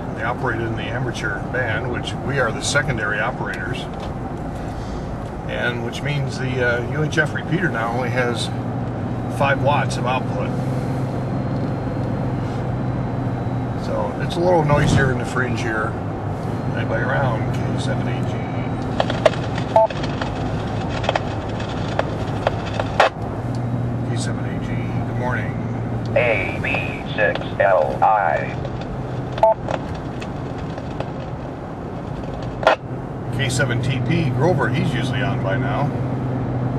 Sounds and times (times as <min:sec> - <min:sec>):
Car: 0:00.0 - 0:36.7
Speech: 0:00.2 - 0:03.9, 0:05.5 - 0:08.6, 0:09.4 - 0:10.5, 0:13.8 - 0:16.0, 0:16.8 - 0:18.7, 0:24.0 - 0:28.6, 0:33.4 - 0:35.9
Radio: 0:05.5 - 0:08.6, 0:09.4 - 0:10.5, 0:16.7 - 0:20.1, 0:24.1 - 0:28.6.